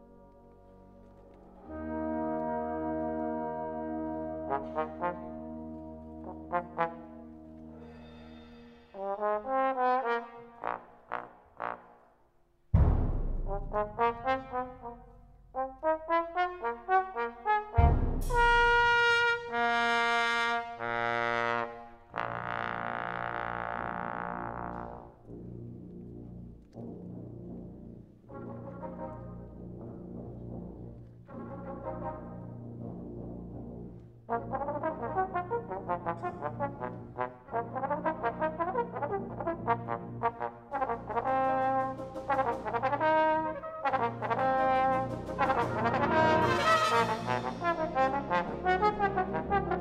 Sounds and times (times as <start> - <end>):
Orchestra: 0.0 - 49.8
Timpani: 0.0 - 49.8
Trombone: 1.6 - 12.2, 12.8 - 49.8.